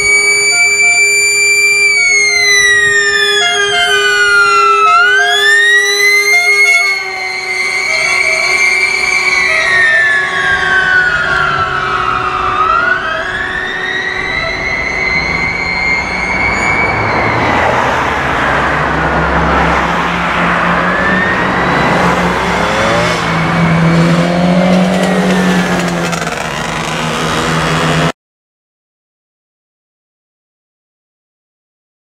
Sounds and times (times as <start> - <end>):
Motor vehicle (road): 0.0 - 28.2.